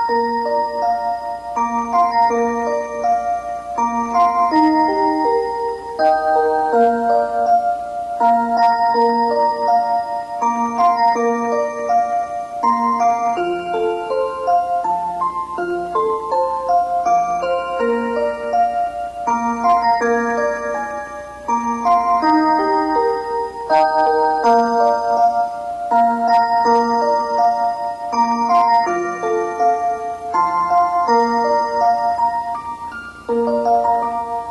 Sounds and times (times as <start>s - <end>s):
Music: 0.0s - 34.5s.